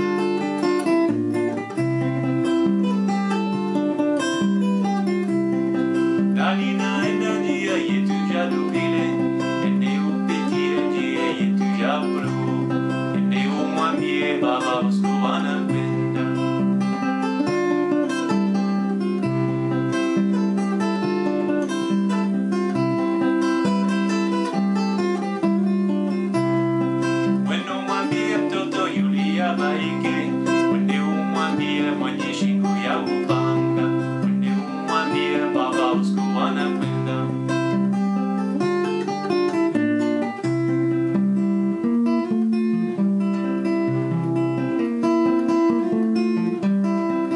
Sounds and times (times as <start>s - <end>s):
Acoustic guitar: 0.0s - 47.3s
Strum: 0.0s - 47.3s.